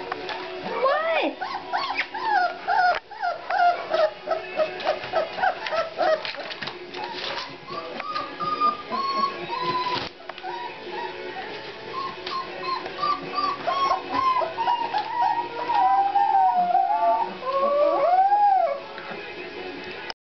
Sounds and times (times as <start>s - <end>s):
Music: 0.0s - 20.1s.